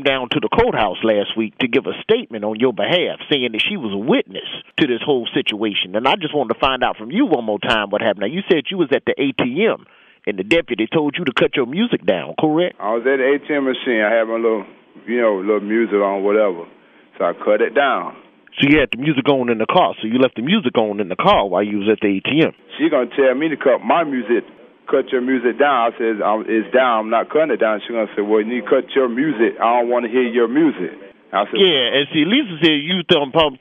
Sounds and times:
Speech: 0.0s - 33.6s.

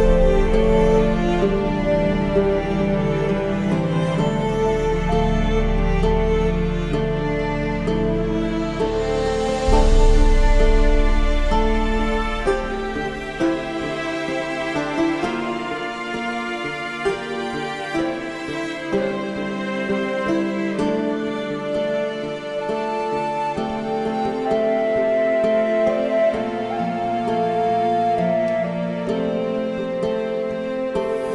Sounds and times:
Soundtrack music: 0.0s - 29.7s
Background music: 0.0s - 31.3s.

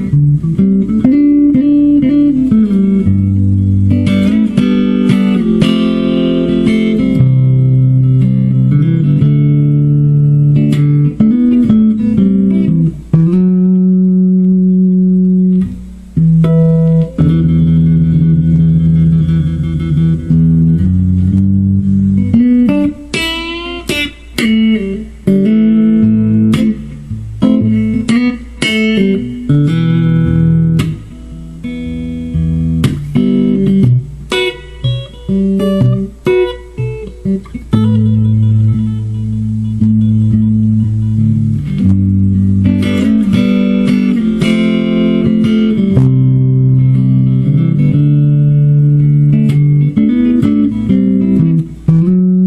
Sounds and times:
Guitar: 0.0s - 52.4s
Inside, small room: 0.0s - 52.4s.

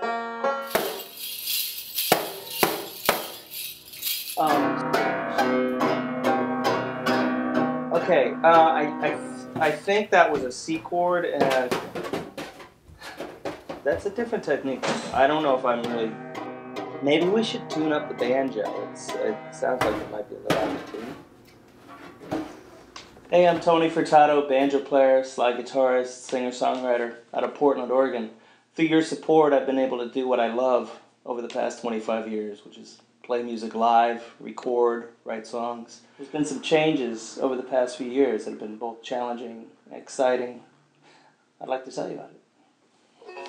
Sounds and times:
Speech: 4.4s - 5.3s, 8.0s - 11.8s, 13.9s - 16.1s, 17.0s - 21.2s, 23.3s - 40.7s, 41.6s - 42.4s.

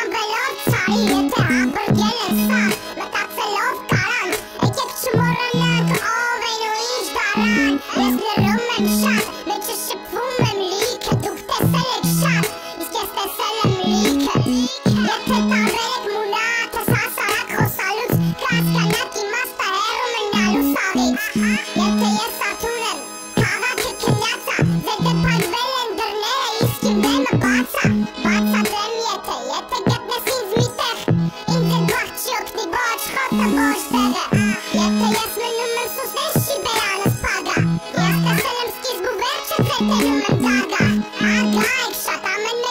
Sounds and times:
Music: 0.0s - 42.7s.

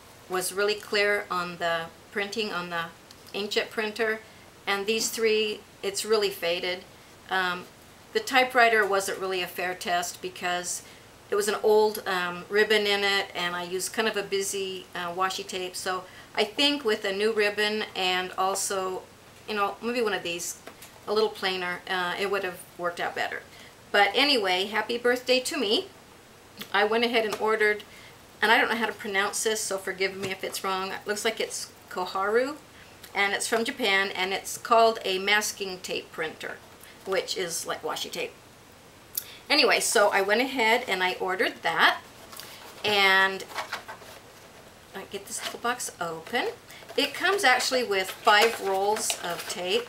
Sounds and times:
Speech: 0.3s - 25.9s, 26.6s - 38.4s, 39.5s - 42.0s, 42.8s - 43.6s, 45.0s - 49.8s.

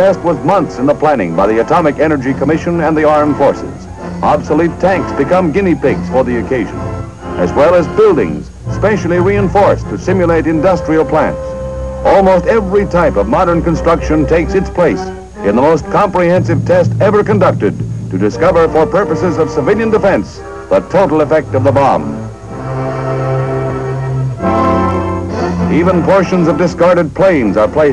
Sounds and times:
Speech: 0.0s - 6.8s, 7.4s - 22.2s, 25.4s - 27.9s
Music: 0.0s - 27.9s.

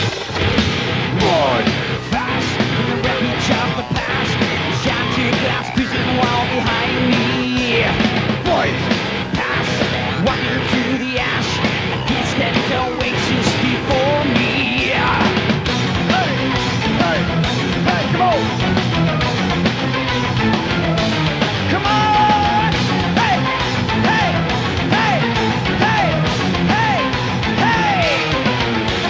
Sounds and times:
Music: 0.0s - 29.0s.

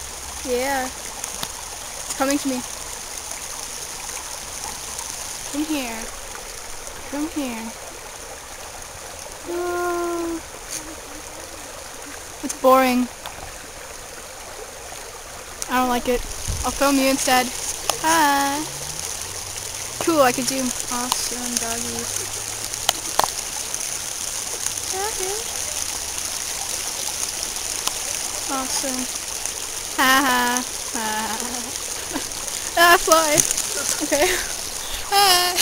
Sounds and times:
Speech: 0.4s - 0.9s, 15.7s - 18.7s, 20.0s - 22.1s, 24.9s - 25.4s, 28.5s - 29.1s, 30.0s - 31.7s, 32.8s - 34.4s, 35.1s - 35.6s.

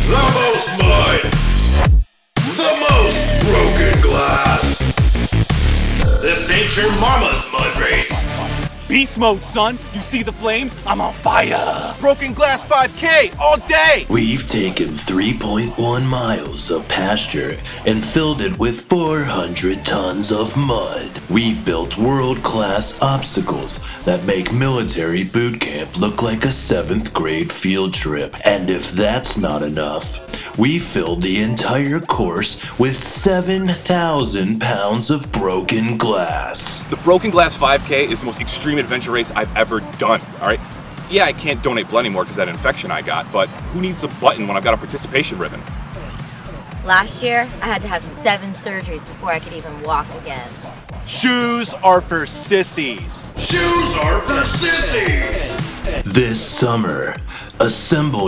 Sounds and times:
Music: 0.0s - 58.2s
Speech: 2.6s - 4.8s, 6.2s - 8.2s, 8.9s - 45.6s, 46.8s - 50.5s, 51.1s - 55.1s, 56.1s - 58.2s.

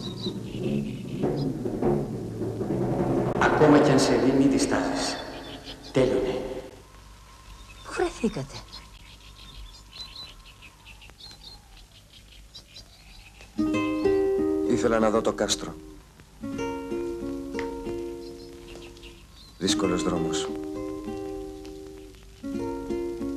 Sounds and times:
Music: 0.0s - 4.9s, 13.6s - 23.3s
Outside, rural or natural: 0.0s - 23.3s
Speech: 3.4s - 5.3s, 5.9s - 6.6s, 7.9s - 8.7s, 14.7s - 15.8s, 19.6s - 20.6s.

